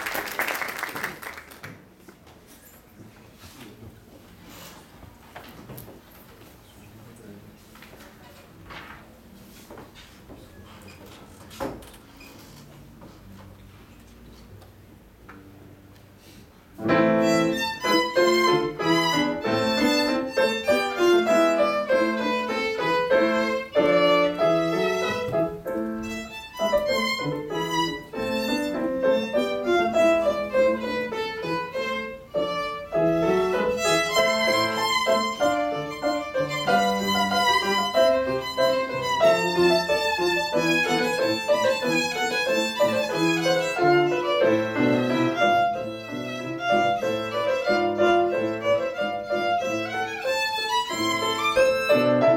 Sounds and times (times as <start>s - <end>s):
Violin, fiddle: 16.9s - 52.3s.